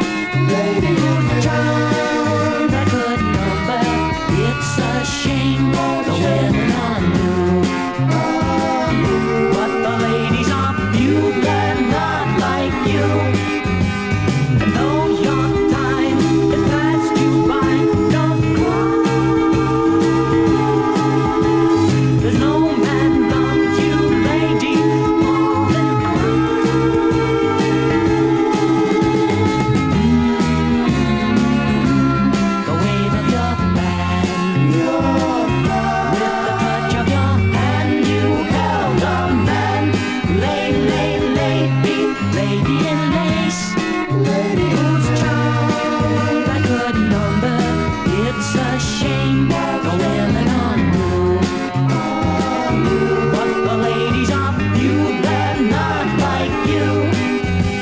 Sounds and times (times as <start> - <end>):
Music: 0.0 - 57.8.